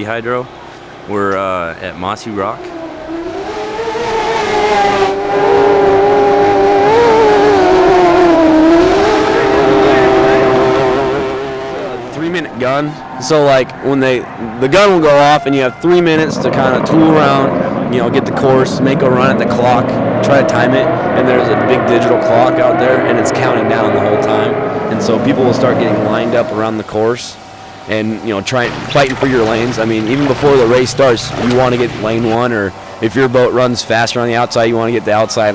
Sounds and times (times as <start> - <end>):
Speech: 0.0 - 0.5, 1.1 - 2.6, 11.8 - 35.5
Motorboat, speedboat: 2.4 - 35.5.